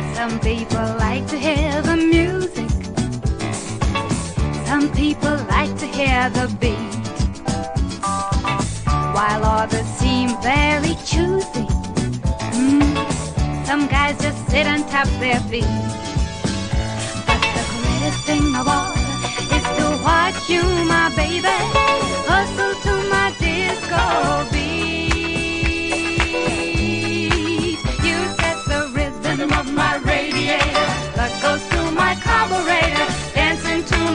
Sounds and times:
Music: 0.0 - 34.1.

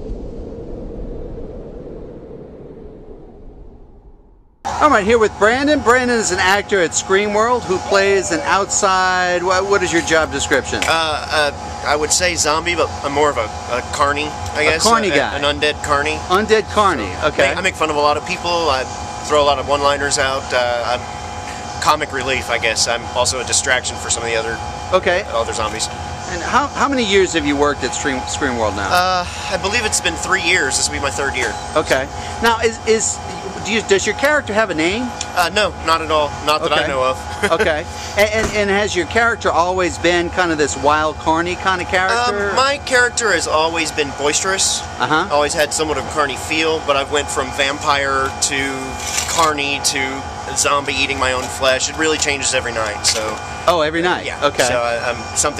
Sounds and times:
Speech: 4.7 - 55.5.

